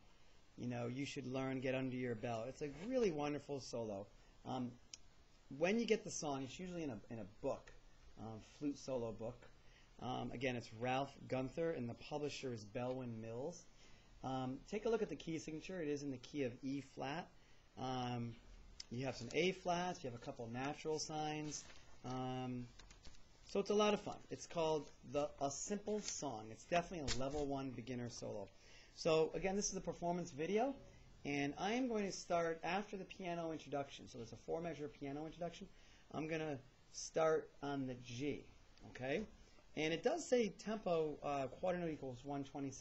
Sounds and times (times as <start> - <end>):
Speech: 0.6 - 22.8, 23.5 - 42.8.